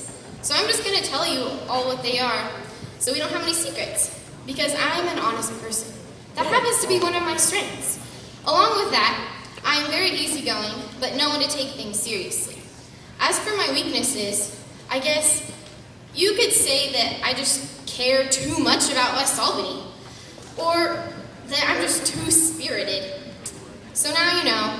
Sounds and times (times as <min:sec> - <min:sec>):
Female speech, woman speaking: 0:00.0 - 0:15.6, 0:16.2 - 0:19.9, 0:20.6 - 0:24.7
Narration, monologue: 0:00.1 - 0:24.7.